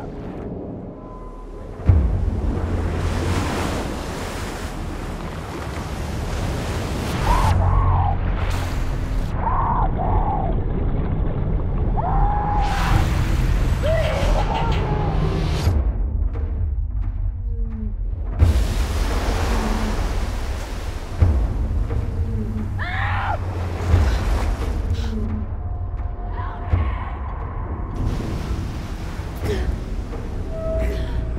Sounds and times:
Music: 0.0s - 5.8s, 7.1s - 31.3s
Outside, rural or natural: 0.0s - 31.3s.

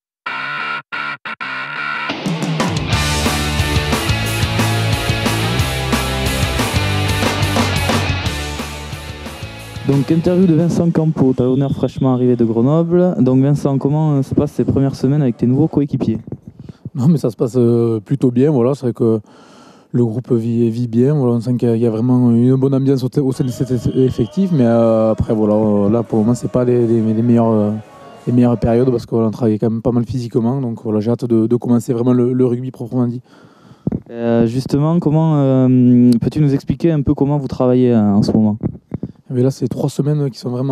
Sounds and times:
Speech: 9.9s - 16.3s, 17.0s - 19.2s, 19.9s - 33.2s, 34.1s - 38.7s, 39.3s - 40.7s.

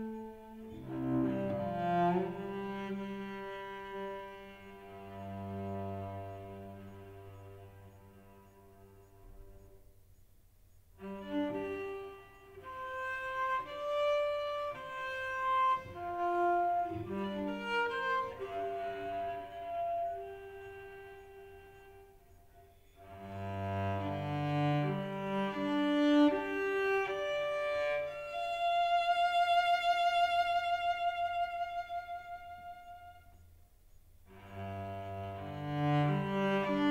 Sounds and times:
Cello: 0.0s - 36.9s
Double bass: 0.7s - 9.6s, 34.3s - 36.9s.

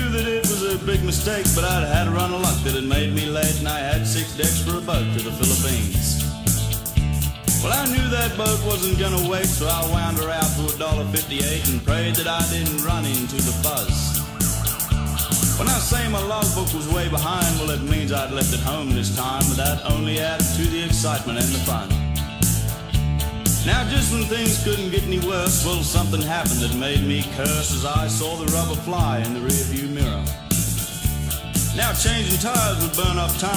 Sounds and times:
Speech: 0.0s - 6.2s, 7.6s - 14.2s, 15.6s - 22.0s, 23.6s - 30.3s, 31.8s - 33.5s
Music: 0.0s - 33.5s.

